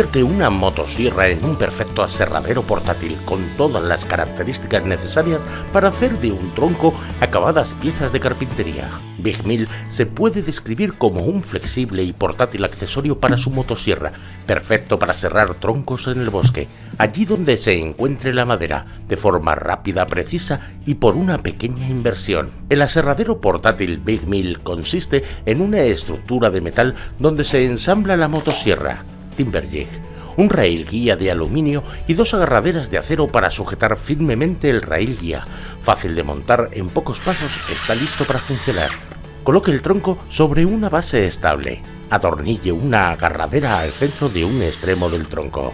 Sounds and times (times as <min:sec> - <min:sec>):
Music: 0:00.0 - 0:45.7
Speech: 0:00.0 - 0:45.7.